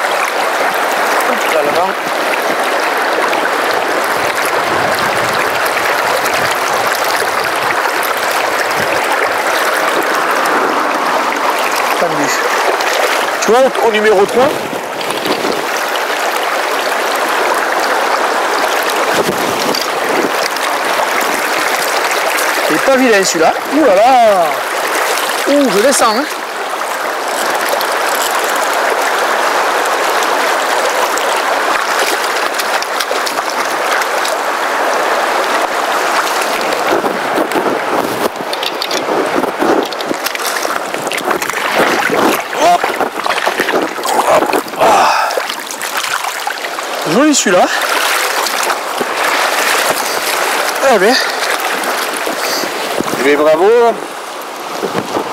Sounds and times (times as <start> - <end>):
Stream: 0.0 - 55.3.